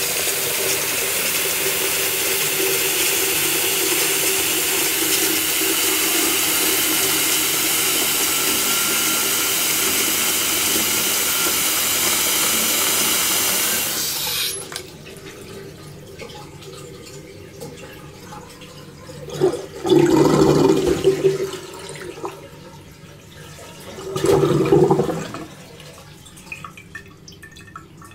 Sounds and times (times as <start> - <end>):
Water: 0.0 - 11.4, 14.5 - 28.1
Sink (filling or washing): 0.0 - 28.1.